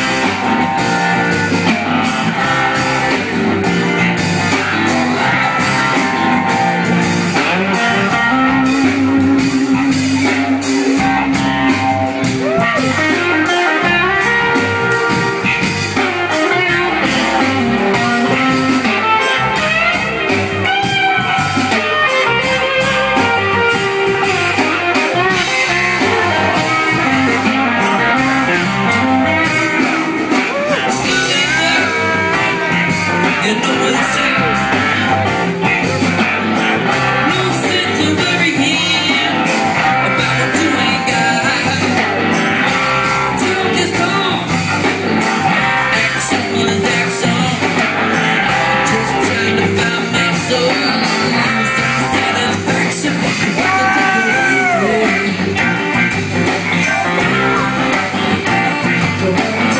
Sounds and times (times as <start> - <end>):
Funk: 0.0 - 59.7
Rhythm and blues: 0.0 - 59.7.